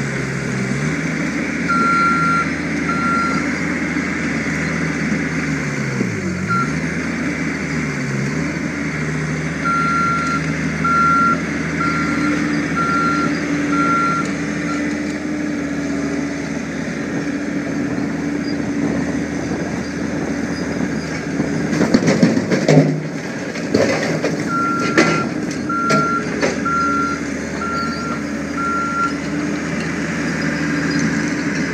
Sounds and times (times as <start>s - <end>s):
Reversing beeps: 1.7s - 3.4s, 6.5s - 6.8s, 9.6s - 14.9s, 24.5s - 29.2s.